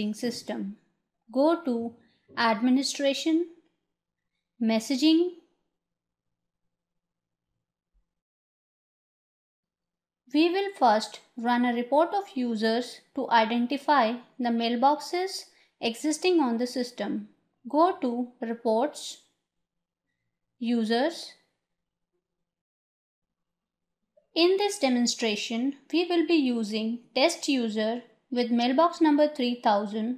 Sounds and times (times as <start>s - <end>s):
Speech: 0.0s - 3.6s, 4.6s - 5.4s, 10.4s - 19.2s, 20.6s - 21.4s, 24.4s - 30.1s.